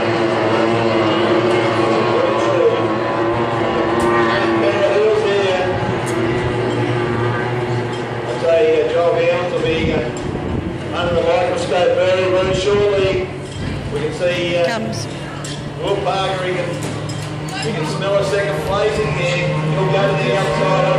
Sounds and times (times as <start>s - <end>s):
Motorboat, speedboat: 0.0s - 20.9s.